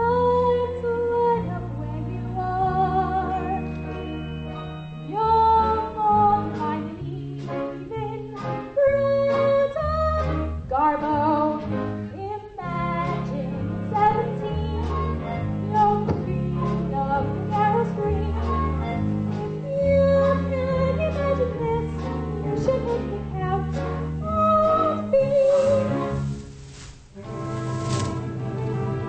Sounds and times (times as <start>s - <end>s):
Opera: 0.0s - 26.5s.